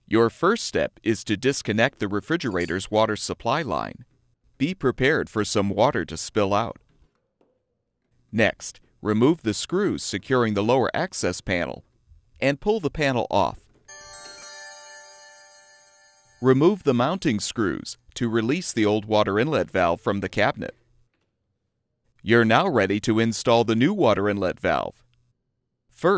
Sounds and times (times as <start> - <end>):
Speech: 0.1 - 4.0, 4.6 - 6.8, 8.3 - 11.8, 12.4 - 13.6, 16.4 - 20.8, 22.2 - 25.0.